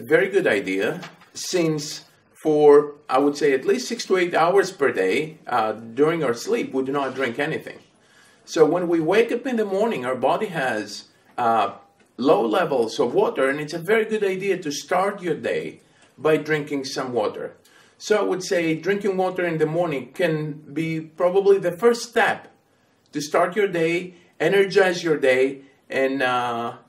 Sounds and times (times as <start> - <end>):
Speech: 0.0 - 7.9, 8.5 - 26.8.